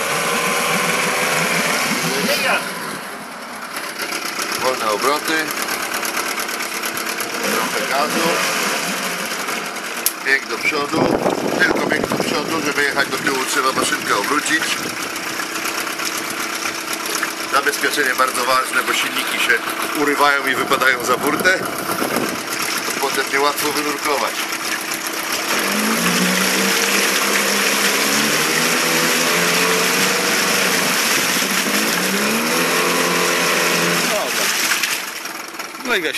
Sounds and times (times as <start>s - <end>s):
Speech: 4.6s - 5.5s, 7.5s - 8.4s, 10.2s - 14.8s, 17.5s - 21.6s, 23.0s - 24.4s, 35.8s - 36.1s.